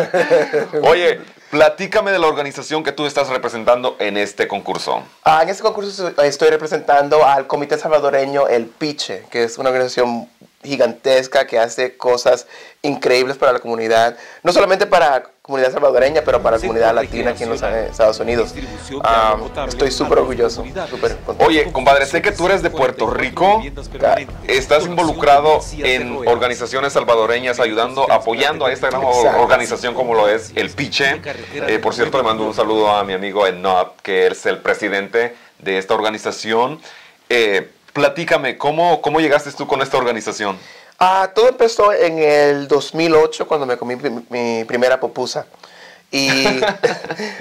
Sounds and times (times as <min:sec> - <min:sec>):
Speech: 0:00.0 - 0:45.5, 0:46.1 - 0:47.0
Television: 0:00.0 - 0:47.4
Music: 0:16.0 - 0:33.2.